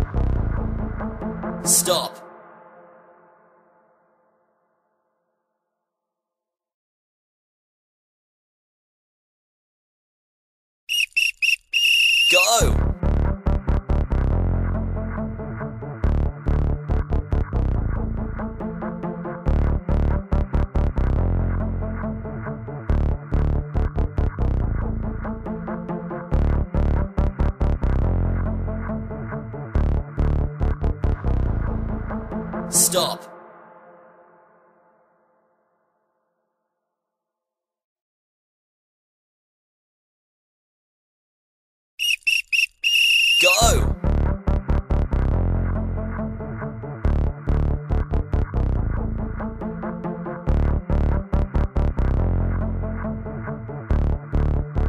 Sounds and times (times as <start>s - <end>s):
Music: 0.0s - 6.0s, 12.4s - 37.2s, 43.5s - 54.8s
Speech: 1.7s - 2.2s, 12.3s - 12.8s, 32.7s - 33.3s, 43.4s - 44.0s.